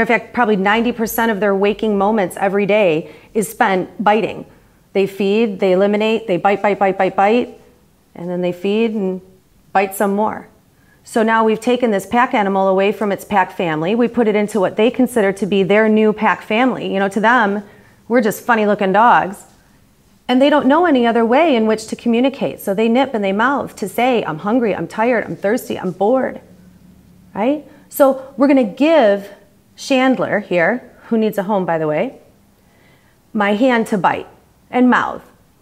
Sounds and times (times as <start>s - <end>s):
Speech: 0.0s - 19.6s, 20.3s - 26.5s, 27.3s - 32.3s, 33.4s - 35.4s.